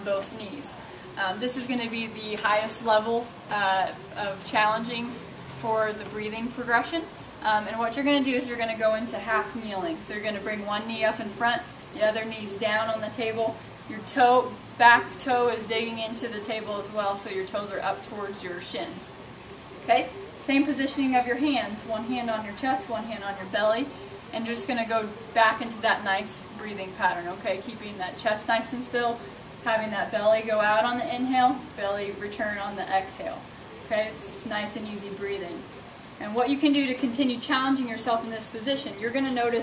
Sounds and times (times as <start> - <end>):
Speech: 0.0 - 19.0, 19.9 - 39.6.